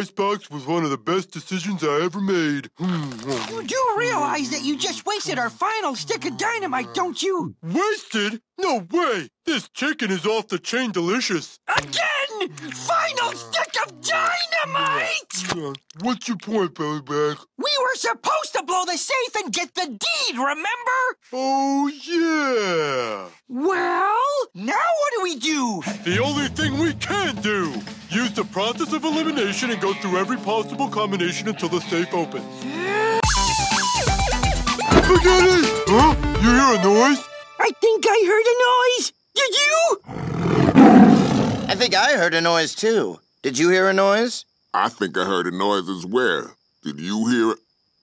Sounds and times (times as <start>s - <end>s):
Speech: 0.0s - 33.2s, 34.9s - 40.0s, 41.7s - 47.6s
Music: 25.9s - 37.8s
Roar: 40.1s - 41.9s.